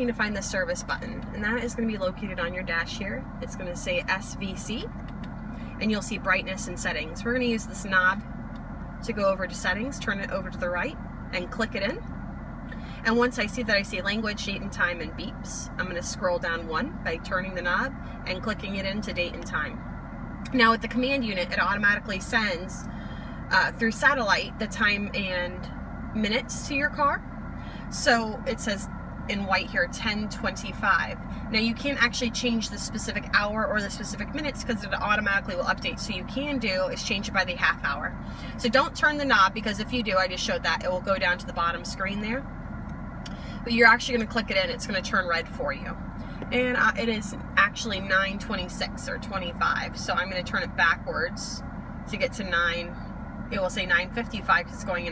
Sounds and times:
Speech: 0.0 - 4.9, 5.8 - 8.2, 9.0 - 12.0, 13.0 - 19.8, 20.5 - 22.8, 23.5 - 27.2, 27.9 - 42.4, 43.7 - 55.1.

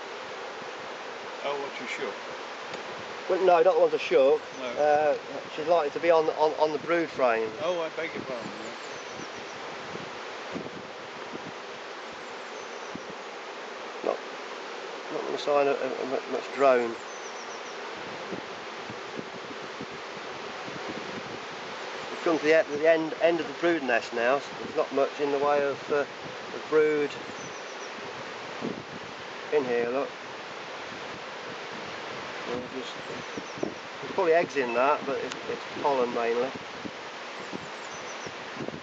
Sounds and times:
Bee, wasp, etc.: 0.0 - 38.8
Speech: 1.4 - 2.2, 3.3 - 8.8, 15.1 - 17.0, 22.2 - 27.2, 29.5 - 30.1, 32.5 - 33.2, 34.1 - 36.6.

